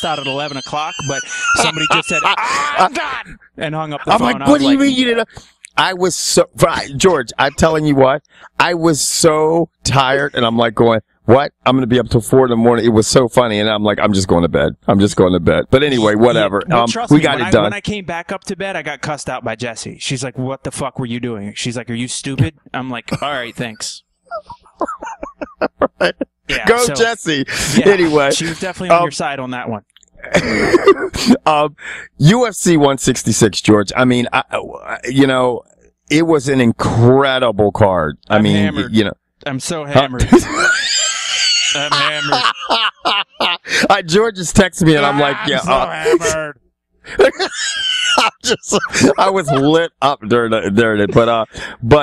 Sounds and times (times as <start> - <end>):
Speech: 0.0 - 42.8, 43.6 - 52.0.